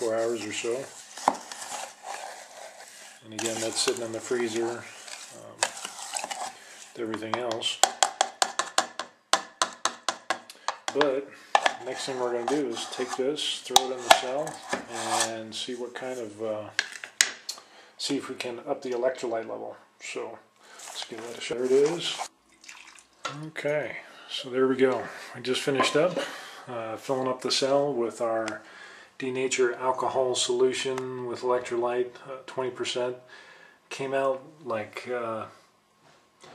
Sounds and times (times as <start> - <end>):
Speech: 0.0 - 0.9, 3.2 - 5.7, 7.0 - 7.8, 10.9 - 16.8, 18.0 - 22.3, 23.3 - 33.3, 33.9 - 35.6.